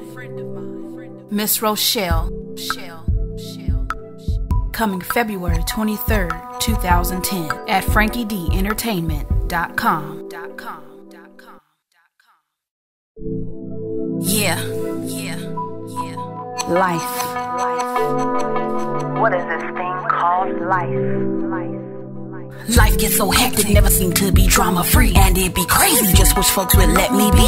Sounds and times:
Speech: 0.0 - 3.8, 4.8 - 11.5, 14.2 - 17.4, 19.2 - 21.8, 22.6 - 27.4
Music: 0.0 - 11.2, 13.2 - 27.4.

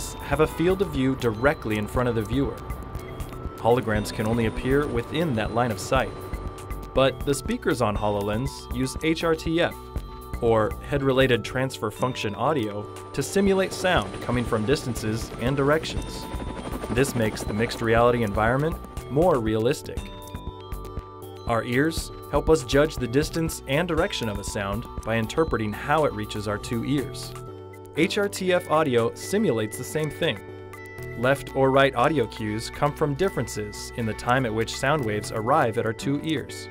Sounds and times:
Speech: 0.0 - 2.6, 3.6 - 6.1, 7.0 - 9.8, 10.4 - 16.3, 16.9 - 20.1, 21.5 - 27.3, 28.0 - 30.4, 31.2 - 36.7
Music: 0.0 - 36.7.

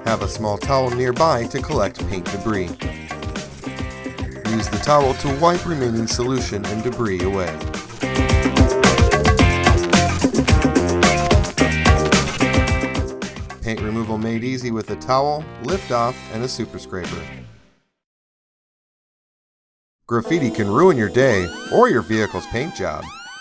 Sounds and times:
Speech: 0.0 - 2.8, 4.5 - 7.6, 13.6 - 17.4, 20.1 - 23.1
Music: 0.0 - 18.0, 20.1 - 23.4.

